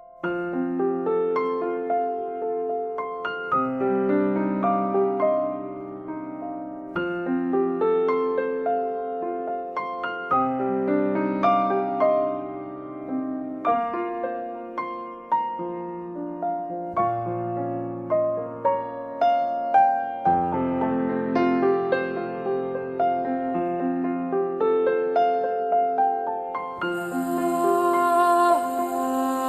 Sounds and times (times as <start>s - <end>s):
Music: 0.0s - 29.4s.